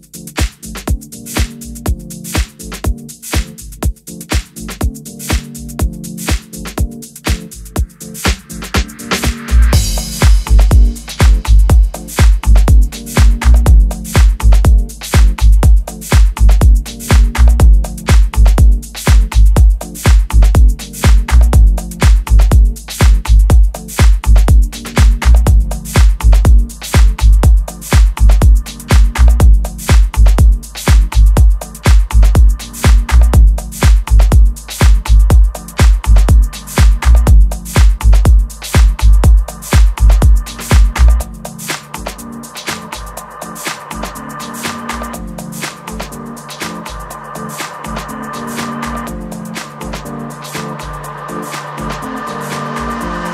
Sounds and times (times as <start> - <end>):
Dance music: 0.0 - 53.3
Rhythm and blues: 0.0 - 53.3.